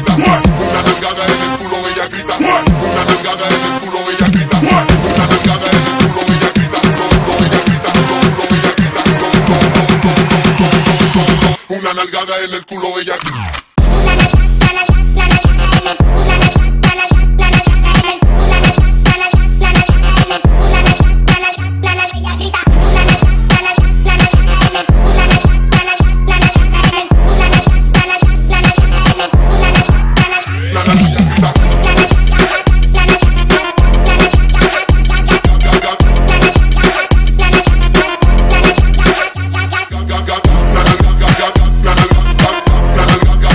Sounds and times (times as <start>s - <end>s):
Electronica: 0.0s - 11.7s, 13.2s - 43.5s.